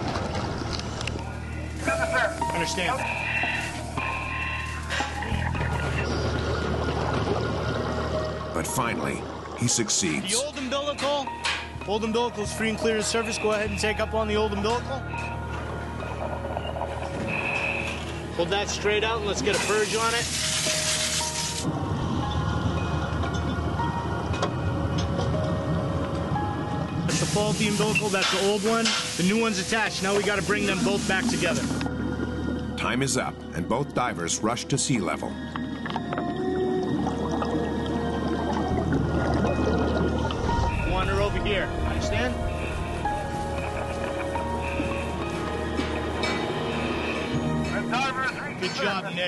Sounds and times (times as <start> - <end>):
Outside, rural or natural: 0.0 - 11.9, 14.7 - 18.9, 35.4 - 47.6
Music: 0.0 - 49.2.